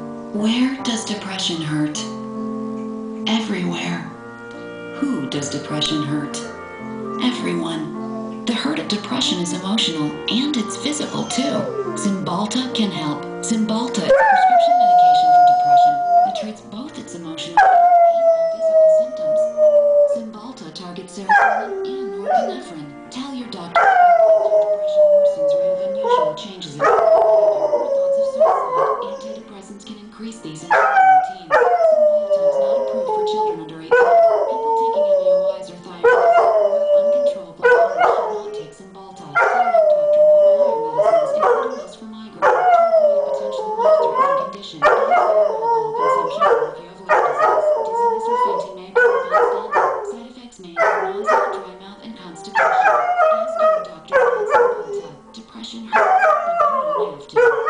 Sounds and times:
Music: 0.0 - 57.6
Speech: 0.3 - 2.2, 3.2 - 4.2, 5.0 - 6.5, 7.2 - 57.6.

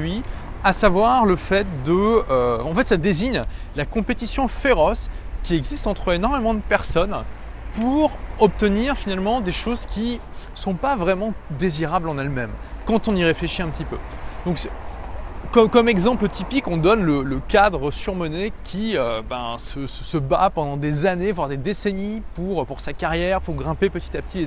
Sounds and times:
Speech: 0.0 - 14.8, 15.5 - 24.4.

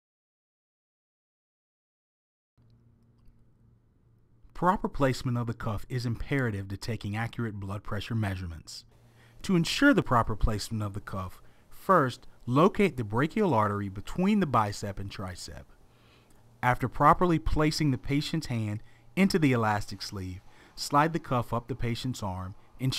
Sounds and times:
Speech: 4.5 - 15.7, 16.6 - 22.9.

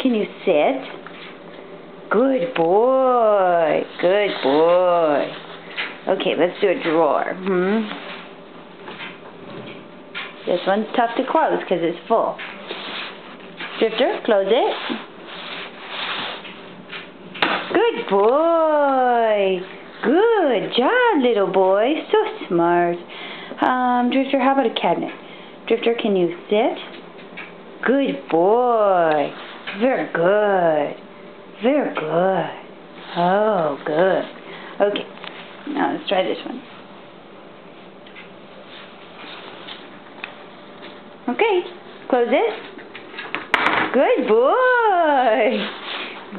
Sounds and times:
Speech: 0.0 - 1.0, 2.1 - 5.4, 6.0 - 8.0, 10.4 - 12.4, 13.8 - 15.1, 17.7 - 27.0, 27.8 - 31.0, 31.6 - 36.7, 41.2 - 42.7, 43.9 - 45.7.

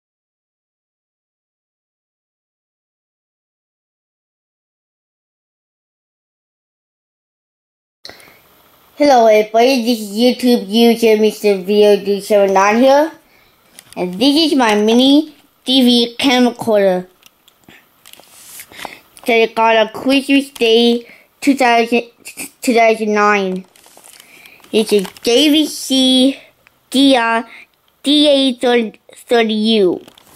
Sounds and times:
Speech: 9.0 - 13.2, 14.0 - 17.2, 19.2 - 23.7, 24.7 - 30.1.

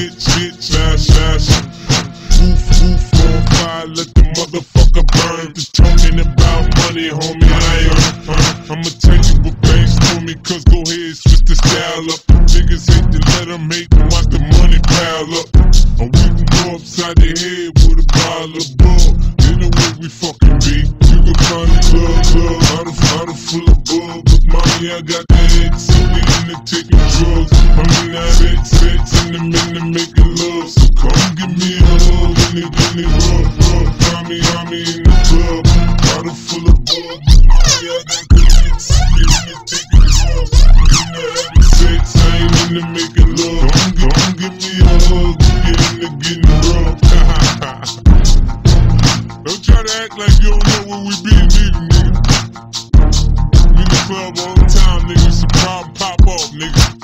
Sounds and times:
Hip hop music: 0.0 - 57.0.

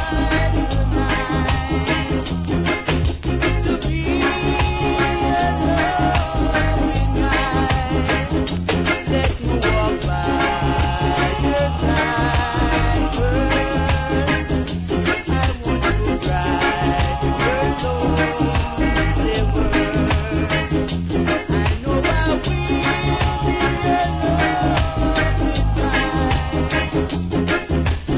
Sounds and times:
Music: 0.0 - 28.1.

